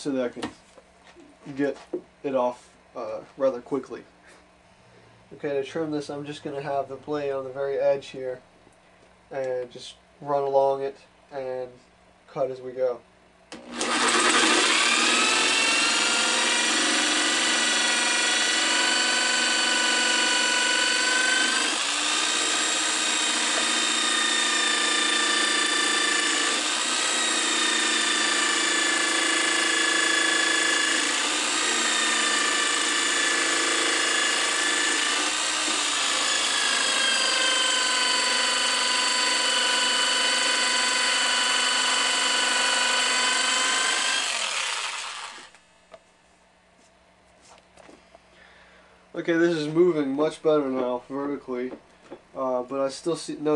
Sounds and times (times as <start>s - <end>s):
Speech: 0.0s - 0.6s, 1.4s - 4.1s, 5.3s - 8.4s, 9.3s - 13.0s, 49.2s - 51.8s, 52.4s - 53.5s.